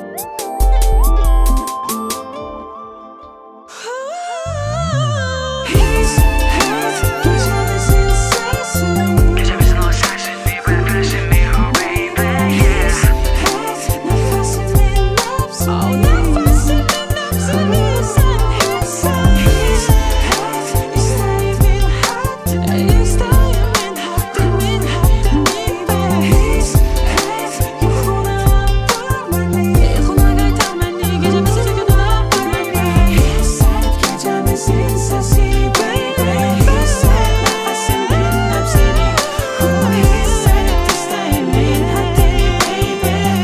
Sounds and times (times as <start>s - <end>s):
Pop music: 0.0s - 43.4s.